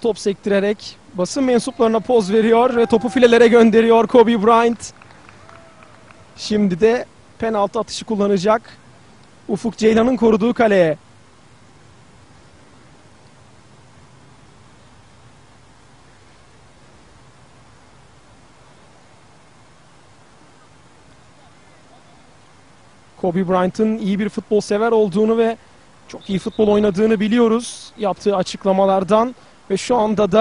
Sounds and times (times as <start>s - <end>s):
Speech: 0.0s - 4.9s, 6.4s - 8.8s, 9.5s - 11.0s, 23.2s - 30.4s.